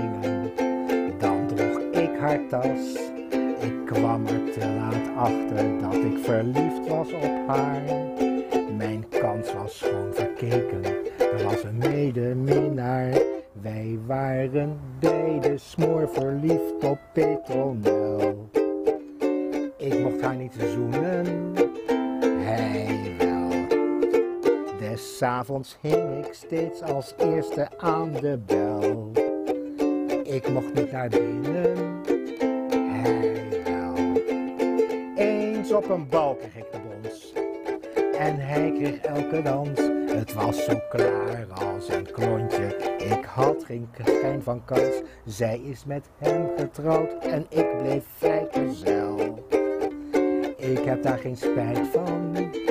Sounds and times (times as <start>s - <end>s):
Ukulele: 0.0s - 52.7s.